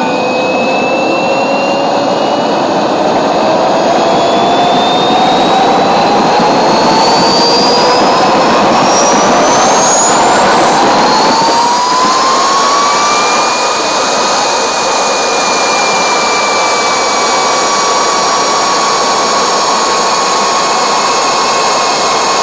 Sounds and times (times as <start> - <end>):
Heavy engine (low frequency): 0.0 - 22.4
Jet engine: 0.0 - 22.4.